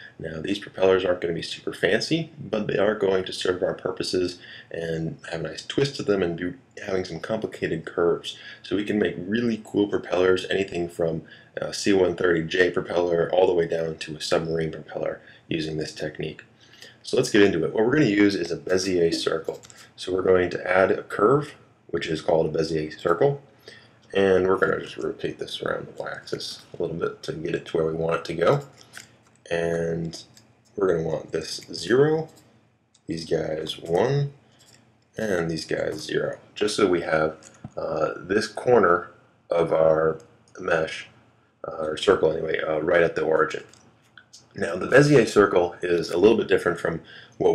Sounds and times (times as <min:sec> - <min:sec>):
Speech: 0:00.0 - 0:23.4, 0:24.1 - 0:28.7, 0:29.5 - 0:32.4, 0:33.1 - 0:34.4, 0:35.2 - 0:47.5.